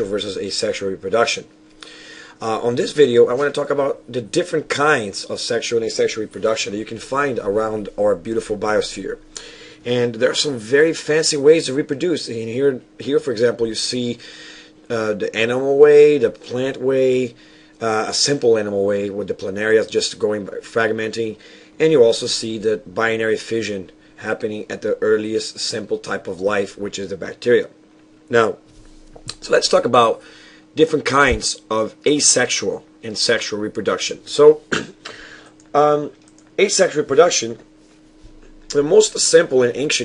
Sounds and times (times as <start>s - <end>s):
Speech: 0.0s - 1.5s, 2.4s - 14.2s, 14.9s - 28.6s, 29.3s - 30.2s, 30.8s - 34.8s, 35.7s - 37.7s, 38.7s - 40.0s.